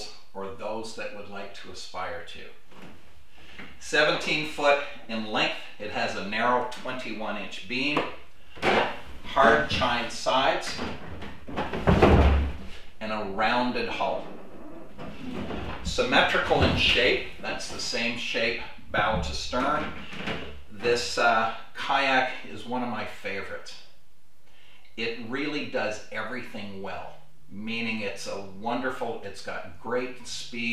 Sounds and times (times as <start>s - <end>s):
Speech: 0.0s - 2.6s, 3.8s - 11.0s, 13.0s - 20.0s, 20.7s - 23.9s, 25.0s - 30.7s.